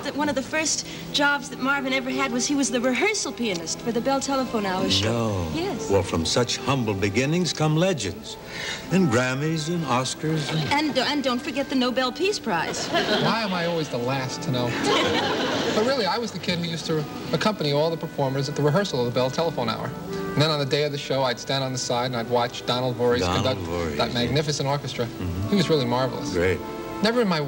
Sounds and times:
Music: 0:00.0 - 0:27.4
Speech: 0:04.7 - 0:08.2, 0:15.8 - 0:27.4.

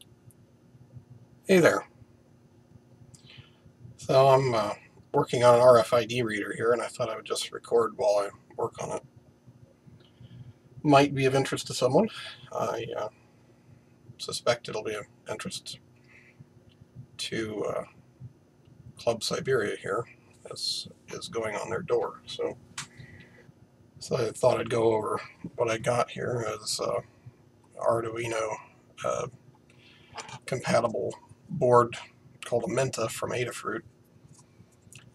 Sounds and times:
Speech: 0:01.5 - 0:01.9, 0:04.0 - 0:09.0, 0:10.8 - 0:13.1, 0:14.2 - 0:15.8, 0:17.2 - 0:18.0, 0:19.0 - 0:22.6, 0:24.0 - 0:27.1, 0:27.8 - 0:29.3, 0:30.2 - 0:33.8.

